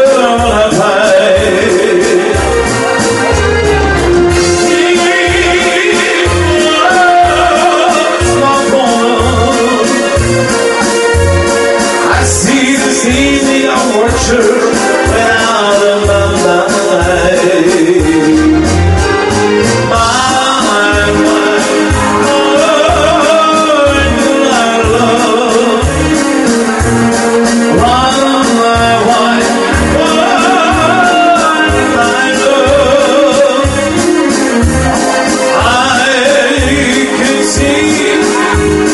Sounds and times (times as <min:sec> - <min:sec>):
Male singing: 0:00.0 - 0:02.5, 0:04.4 - 0:10.2, 0:12.1 - 0:18.6, 0:19.8 - 0:26.2, 0:27.7 - 0:34.2, 0:35.2 - 0:38.9
Music: 0:00.0 - 0:38.9.